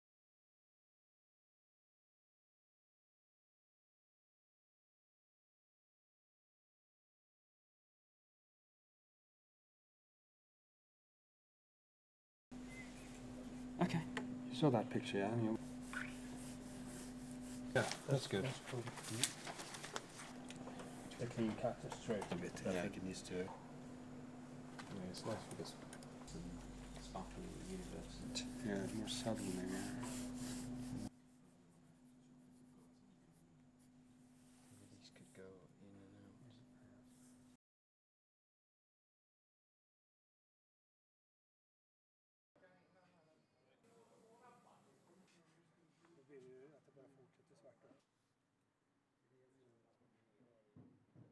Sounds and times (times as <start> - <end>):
Speech: 17.8 - 19.3, 21.2 - 23.6, 24.9 - 30.2, 34.8 - 37.2, 42.6 - 48.1, 49.3 - 50.8.